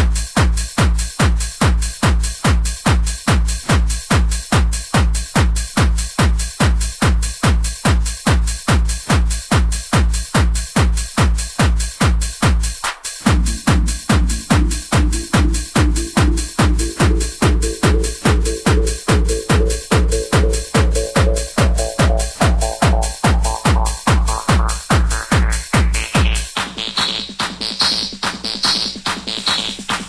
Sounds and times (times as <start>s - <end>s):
Techno: 10.8s - 30.0s.